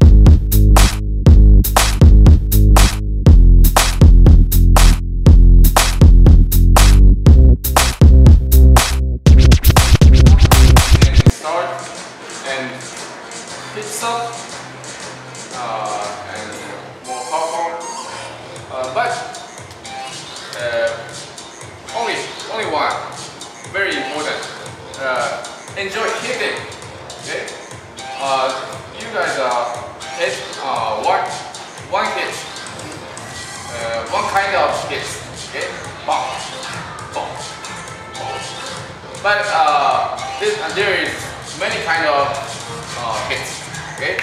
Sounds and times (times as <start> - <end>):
Music: 0.0 - 44.2.